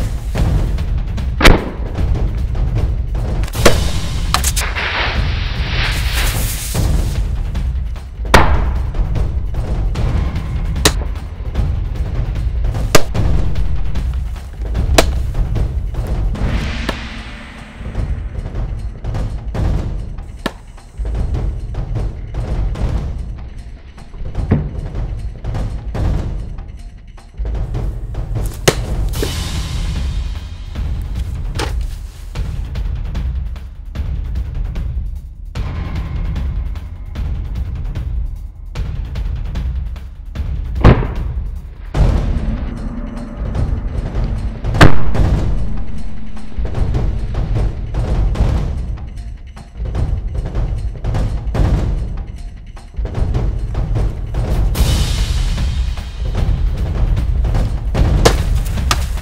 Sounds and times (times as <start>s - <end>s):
Music: 0.0s - 59.2s.